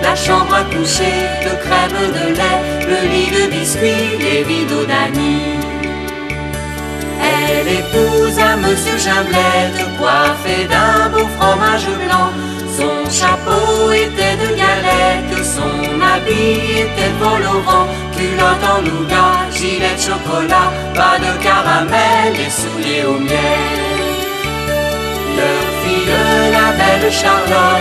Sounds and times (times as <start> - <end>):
Music: 0.0 - 27.8.